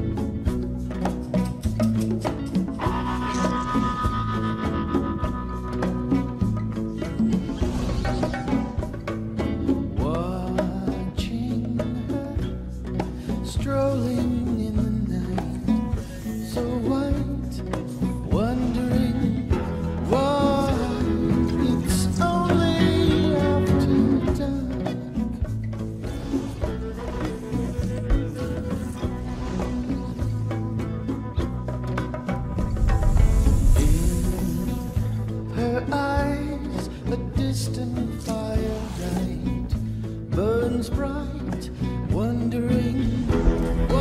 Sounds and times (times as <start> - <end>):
Music: 0.0 - 44.0.